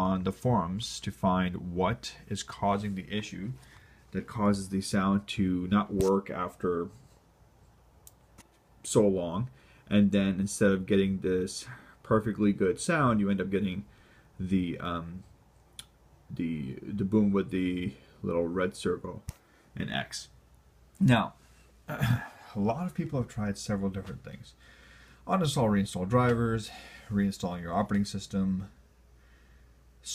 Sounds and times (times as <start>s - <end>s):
Speech: 0.0s - 7.0s, 8.8s - 15.3s, 16.3s - 20.4s, 21.0s - 24.6s, 25.3s - 28.8s.